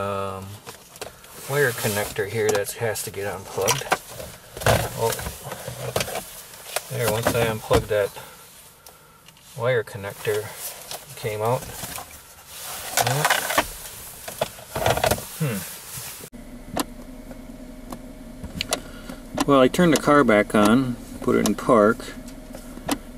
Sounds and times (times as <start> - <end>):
Speech: 0.0 - 0.6, 1.5 - 3.9, 4.8 - 5.3, 6.9 - 8.3, 9.6 - 11.8, 13.0 - 13.4, 19.4 - 22.2
Vehicle: 0.0 - 23.1.